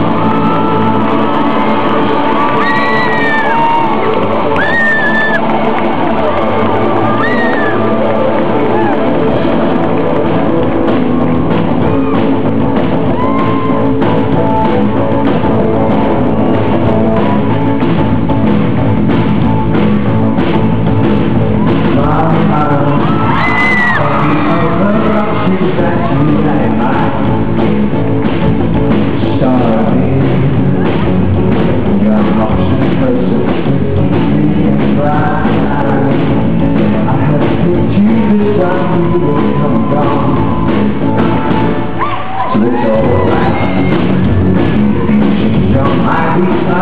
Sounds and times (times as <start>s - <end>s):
Music: 0.0s - 46.8s.